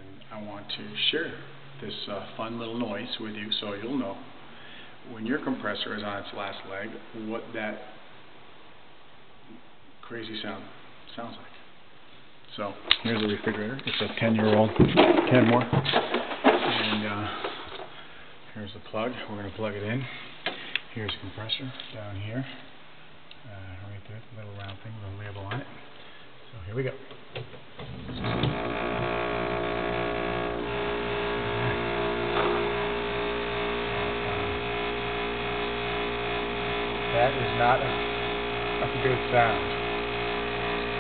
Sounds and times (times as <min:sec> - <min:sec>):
Speech: 0:00.0 - 0:04.3, 0:05.1 - 0:08.0, 0:10.0 - 0:11.6, 0:12.5 - 0:15.8, 0:16.8 - 0:17.4, 0:18.5 - 0:20.2, 0:20.9 - 0:22.7, 0:23.4 - 0:25.8, 0:26.5 - 0:27.1, 0:37.1 - 0:38.0, 0:38.8 - 0:39.8.